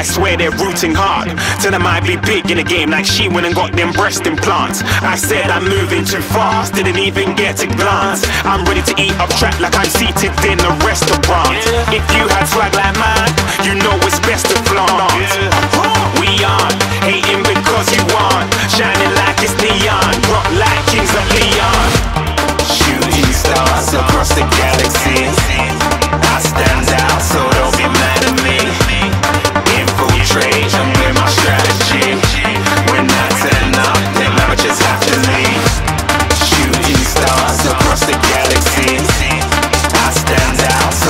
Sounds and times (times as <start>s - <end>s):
Music: 0.0s - 41.0s.